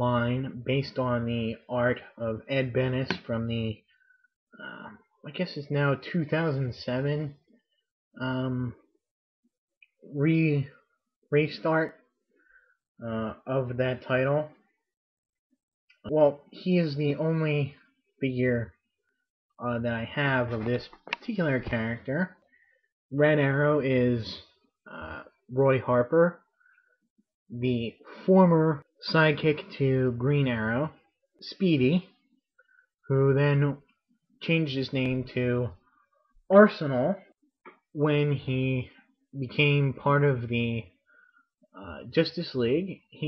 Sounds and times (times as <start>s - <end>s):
Speech: 0.0s - 3.9s, 4.6s - 7.6s, 8.2s - 8.9s, 10.0s - 12.0s, 13.0s - 14.8s, 16.0s - 18.8s, 19.6s - 22.4s, 23.1s - 26.5s, 27.5s - 32.2s, 33.1s - 35.9s, 36.5s - 41.0s, 41.7s - 43.2s.